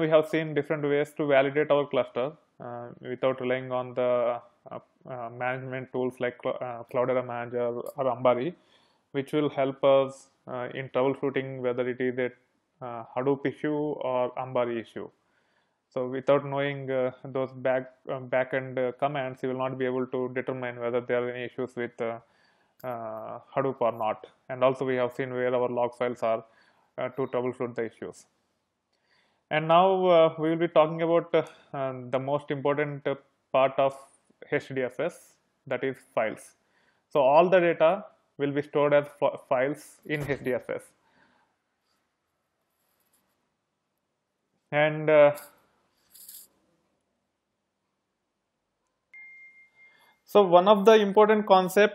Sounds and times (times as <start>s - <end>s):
Speech: 0.0s - 8.6s, 9.2s - 15.2s, 16.0s - 28.3s, 29.5s - 36.6s, 37.2s - 40.9s, 44.8s - 45.5s, 50.3s - 51.9s.